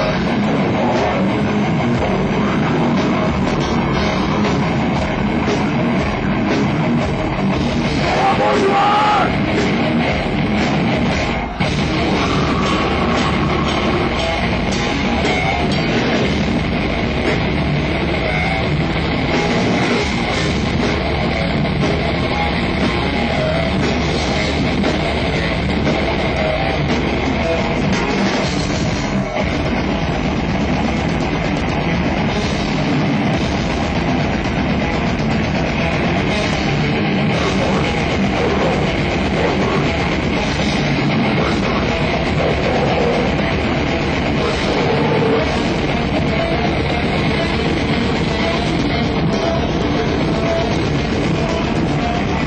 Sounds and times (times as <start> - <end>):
Guitar: 0.0 - 52.4
Heavy metal: 0.0 - 52.4.